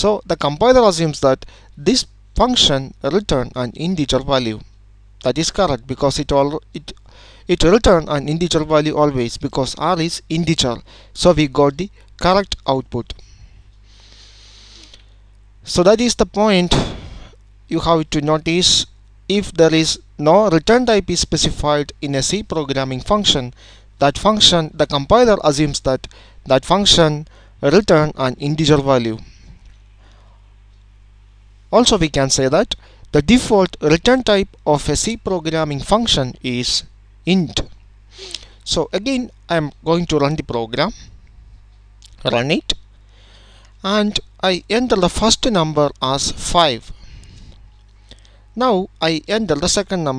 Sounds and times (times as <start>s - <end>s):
Narration, monologue: 0.0s - 50.1s.